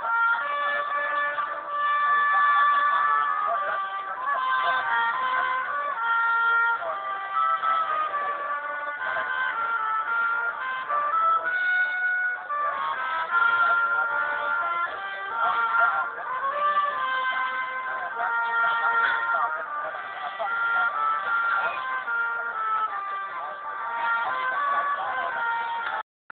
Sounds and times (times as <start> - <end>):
Trumpet: 0.0 - 26.0
Speech: 0.1 - 26.0.